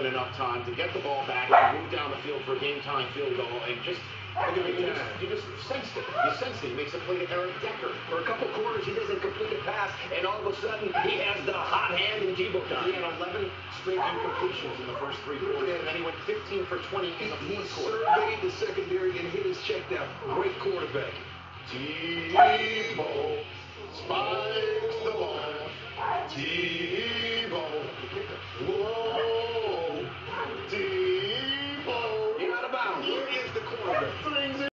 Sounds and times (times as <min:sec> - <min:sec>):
Speech: 0:00.0 - 0:34.7.